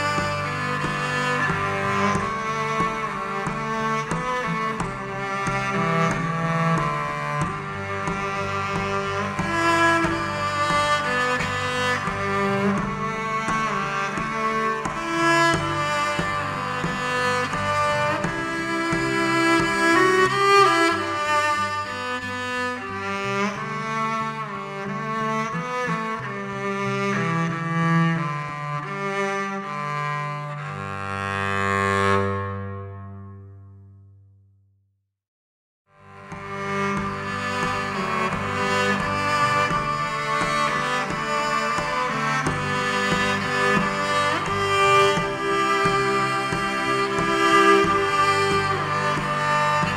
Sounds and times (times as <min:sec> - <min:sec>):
Cello: 0:00.0 - 0:34.2, 0:35.9 - 0:49.9.